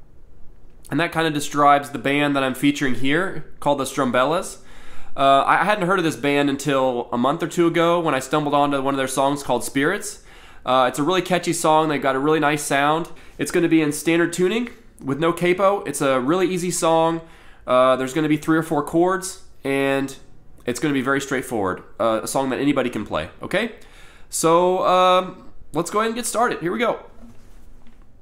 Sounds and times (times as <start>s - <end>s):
Speech: 0.9s - 4.6s, 5.2s - 27.2s.